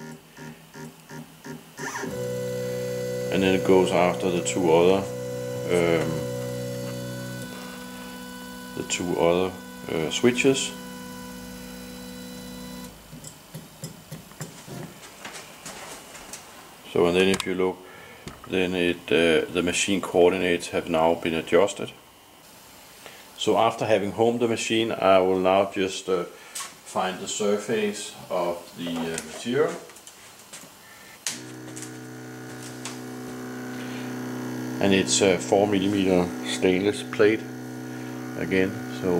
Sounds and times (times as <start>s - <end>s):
Speech: 3.3s - 6.2s, 8.8s - 10.8s, 16.9s - 17.8s, 18.5s - 22.0s, 23.4s - 26.3s, 26.9s - 29.9s, 34.8s - 37.5s, 38.4s - 39.1s.